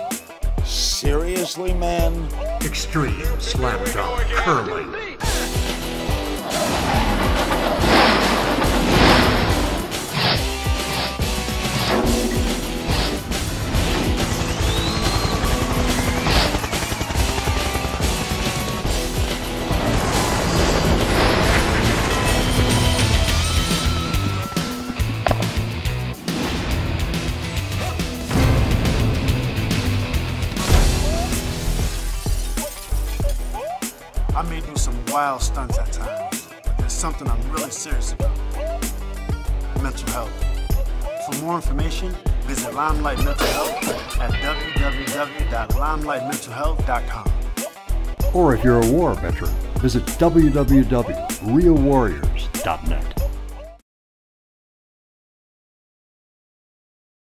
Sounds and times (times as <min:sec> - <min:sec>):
Music: 0:00.0 - 0:53.8.